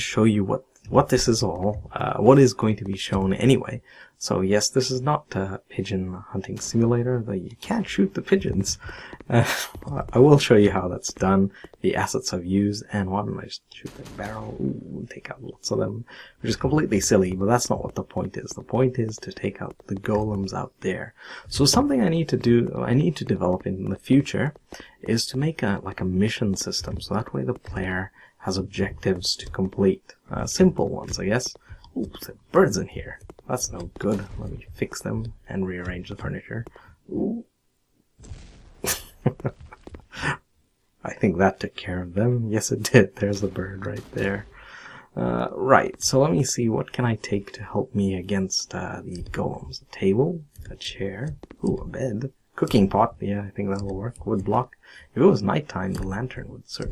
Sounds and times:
Speech: 0:00.0 - 0:37.5, 0:40.2 - 0:40.4, 0:41.0 - 0:56.9.

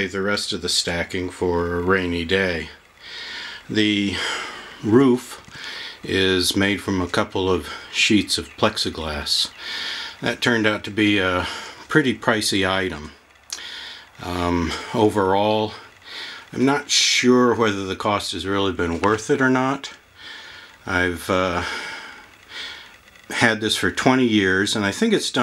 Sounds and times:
Speech: 0:00.0 - 0:02.8, 0:03.7 - 0:09.6, 0:10.2 - 0:13.2, 0:14.2 - 0:15.9, 0:16.5 - 0:20.0, 0:20.8 - 0:22.0, 0:23.3 - 0:25.4.

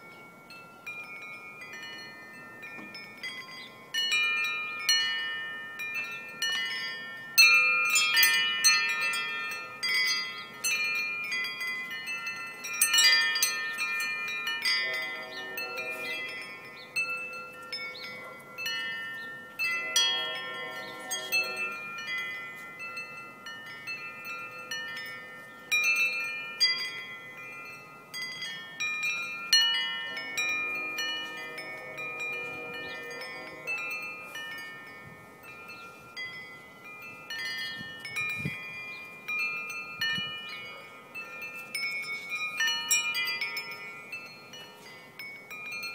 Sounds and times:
Wind chime: 0:00.0 - 0:45.9.

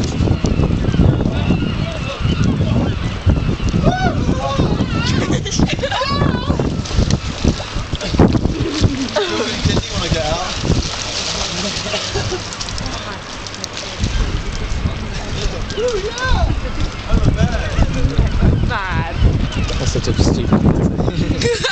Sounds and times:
Stream: 0:00.0 - 0:21.7
Gurgling: 0:03.8 - 0:19.9.

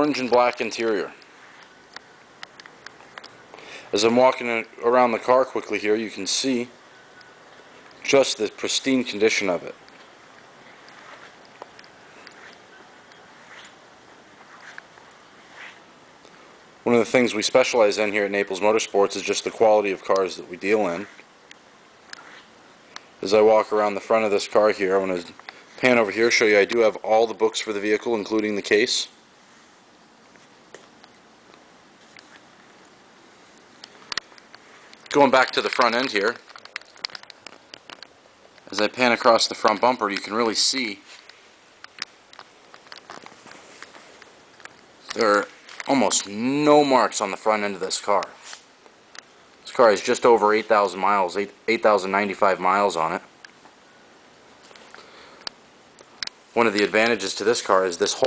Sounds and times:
Speech: 0:00.0 - 0:01.2, 0:03.9 - 0:06.8, 0:08.0 - 0:09.8, 0:16.8 - 0:21.2, 0:23.2 - 0:29.2, 0:35.1 - 0:36.4, 0:38.7 - 0:41.1, 0:45.0 - 0:48.4, 0:49.6 - 0:53.3, 0:56.6 - 0:58.2.

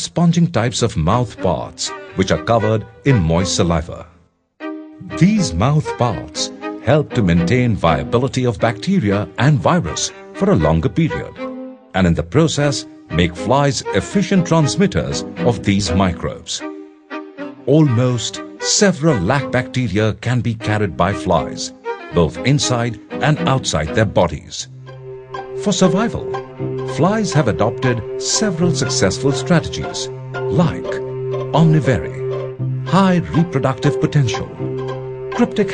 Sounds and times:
Speech: 0:00.0 - 0:04.1, 0:05.0 - 0:11.4, 0:12.0 - 0:16.7, 0:17.7 - 0:24.7, 0:25.6 - 0:26.3, 0:26.9 - 0:31.0, 0:31.6 - 0:32.3, 0:32.9 - 0:34.6, 0:35.4 - 0:35.7
Music: 0:00.0 - 0:35.7.

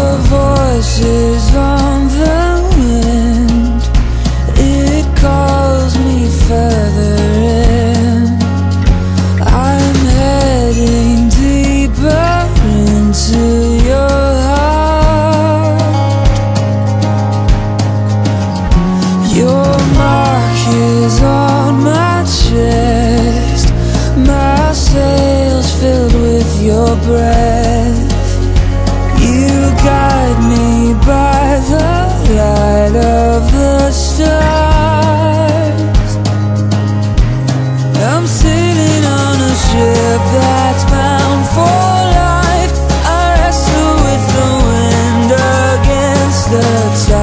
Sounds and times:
Music: 0:00.0 - 0:47.2.

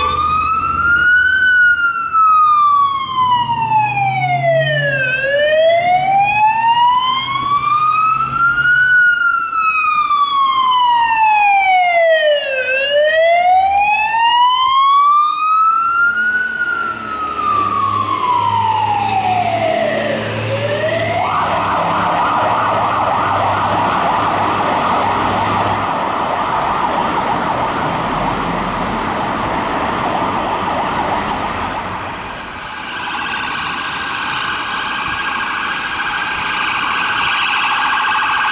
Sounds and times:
Fire engine, fire truck (siren): 0:00.0 - 0:38.5.

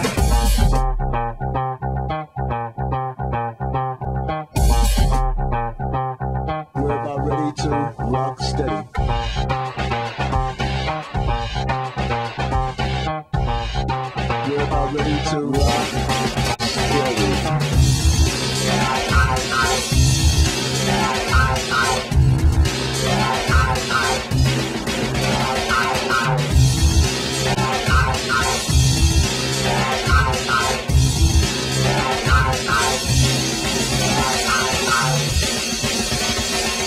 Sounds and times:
Bass guitar: 0:00.0 - 0:36.8.

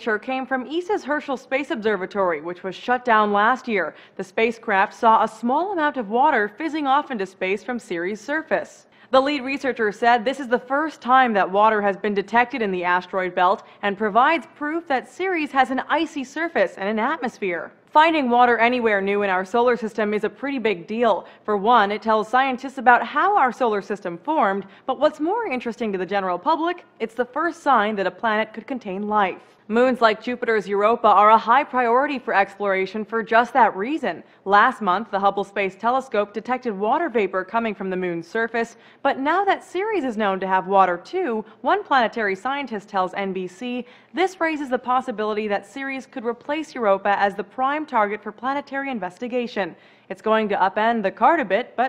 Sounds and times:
Speech: 0:00.0 - 0:51.8.

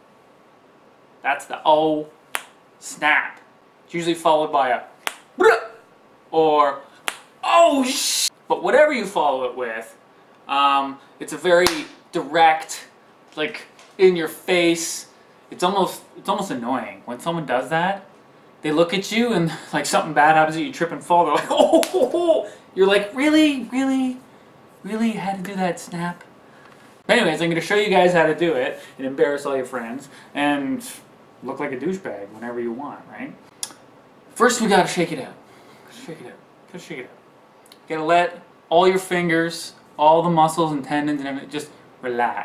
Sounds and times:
Speech: 0:01.2 - 0:02.2, 0:02.8 - 0:24.2, 0:24.8 - 0:26.3, 0:27.1 - 0:33.4, 0:34.4 - 0:37.2, 0:37.8 - 0:42.4.

